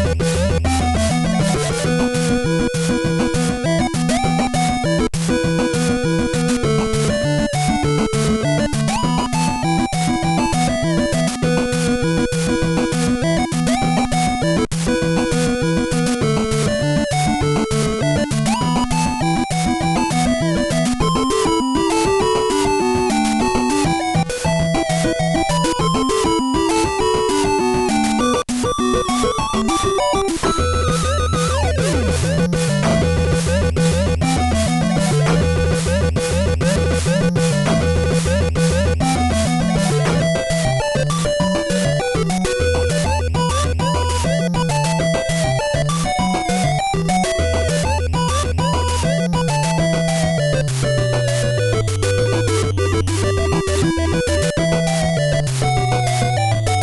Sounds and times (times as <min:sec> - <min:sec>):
Music: 0:00.0 - 0:56.8.